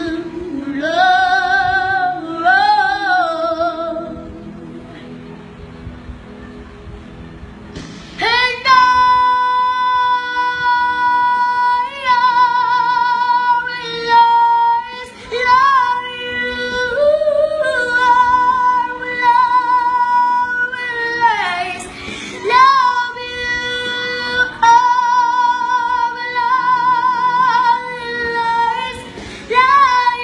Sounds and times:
Female singing: 0:00.0 - 0:04.4, 0:08.2 - 0:30.2
Music: 0:00.0 - 0:30.2.

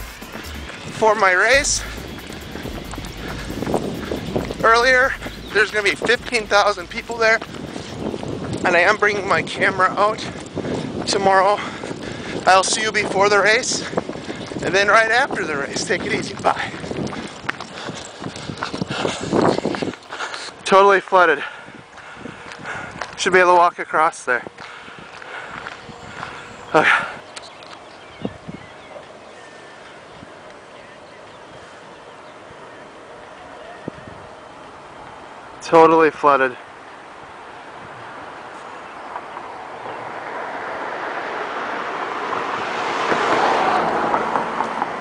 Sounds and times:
Music: 0:00.0 - 0:07.2
Run: 0:00.0 - 0:34.3
Speech: 0:00.9 - 0:01.9, 0:04.6 - 0:07.4, 0:08.6 - 0:10.3, 0:11.1 - 0:11.7, 0:12.4 - 0:13.9, 0:14.6 - 0:16.7, 0:20.6 - 0:21.4, 0:23.2 - 0:24.5, 0:35.6 - 0:36.6.

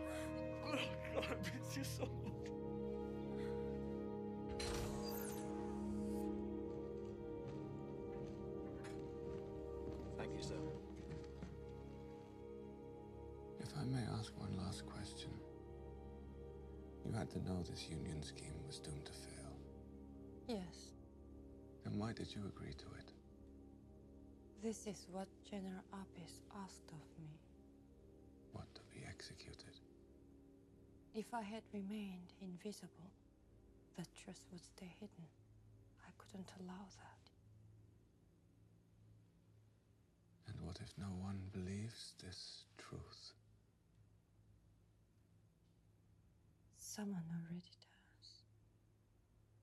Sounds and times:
Speech: 0:00.6 - 0:02.4, 0:10.2 - 0:10.7, 0:13.6 - 0:15.4, 0:17.0 - 0:19.6, 0:21.9 - 0:23.1, 0:28.6 - 0:29.8, 0:31.2 - 0:33.1, 0:40.5 - 0:43.4
Whispering: 0:36.0 - 0:37.3, 0:46.9 - 0:48.5.

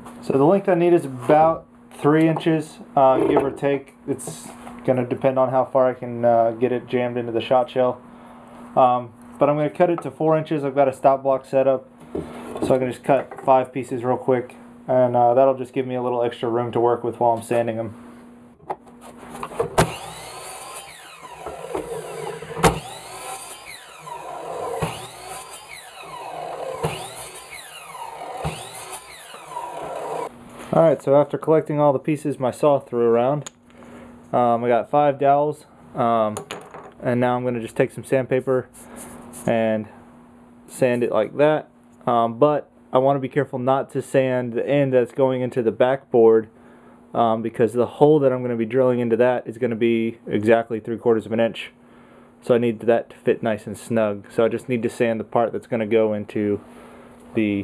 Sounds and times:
Speech: 0:00.2 - 0:08.0, 0:08.8 - 0:11.9, 0:12.6 - 0:18.0, 0:30.7 - 0:33.5, 0:34.3 - 0:36.4, 0:37.0 - 0:38.7, 0:39.5 - 0:40.0, 0:40.7 - 0:46.5, 0:47.2 - 0:51.8, 0:52.4 - 0:56.6, 0:57.4 - 0:57.6.

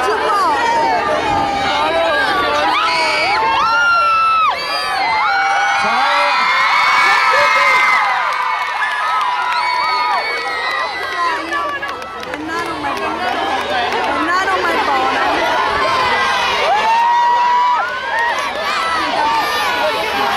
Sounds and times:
Cheering: 0:00.0 - 0:20.3.

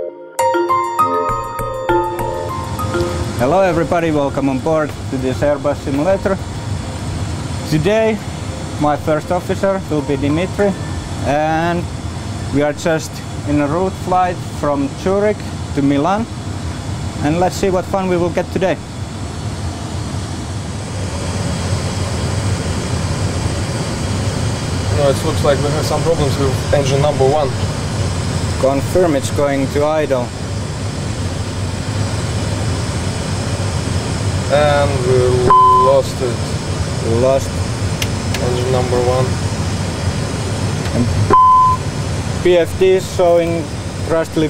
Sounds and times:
Vehicle: 0:03.0 - 0:44.4
Speech: 0:03.4 - 0:06.4, 0:12.6 - 0:16.3, 0:17.2 - 0:18.8, 0:24.9 - 0:27.6, 0:28.6 - 0:30.3, 0:34.5 - 0:36.4, 0:38.4 - 0:39.4, 0:42.4 - 0:44.4
Medium engine (mid frequency): 0:09.9 - 0:44.4.

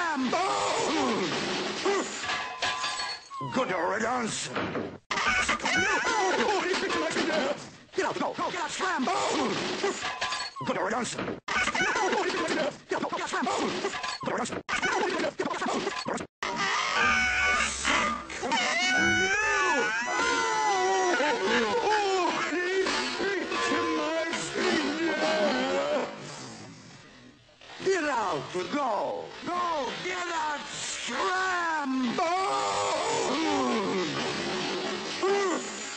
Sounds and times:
Speech: 0:06.1 - 0:10.0, 0:10.6 - 0:11.2, 0:11.9 - 0:15.6, 0:19.2 - 0:26.1, 0:27.8 - 0:32.5.

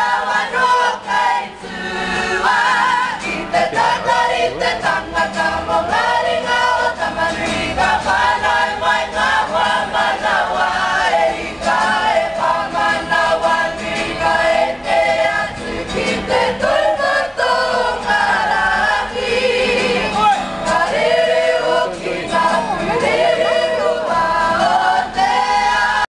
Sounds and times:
Choir: 0:00.0 - 0:26.0.

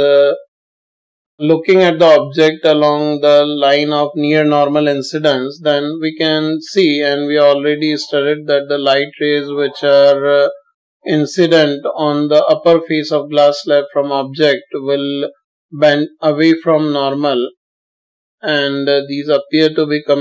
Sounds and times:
Speech: 0:00.0 - 0:00.5, 0:01.4 - 0:17.6, 0:18.4 - 0:20.2.

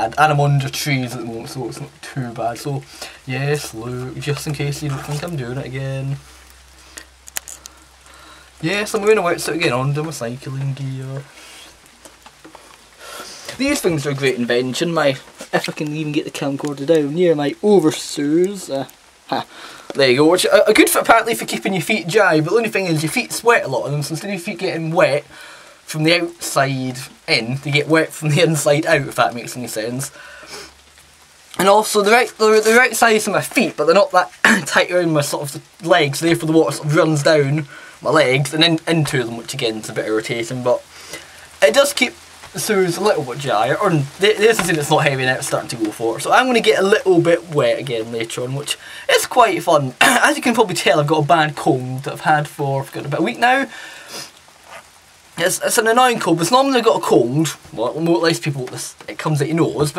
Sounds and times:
Speech: 0:00.0 - 0:06.2, 0:08.6 - 0:11.3, 0:13.5 - 0:25.3, 0:25.9 - 0:30.2, 0:31.6 - 0:40.9, 0:41.6 - 0:53.7, 0:55.4 - 0:59.9
Rain on surface: 0:00.0 - 0:59.9.

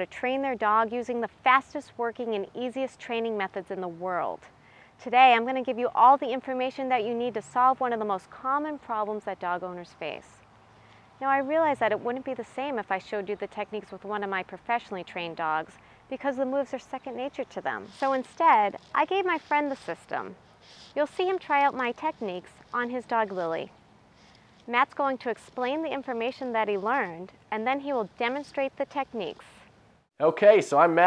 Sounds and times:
Speech: 0:00.0 - 0:10.4, 0:11.2 - 0:23.7, 0:24.7 - 0:29.5, 0:30.2 - 0:31.0.

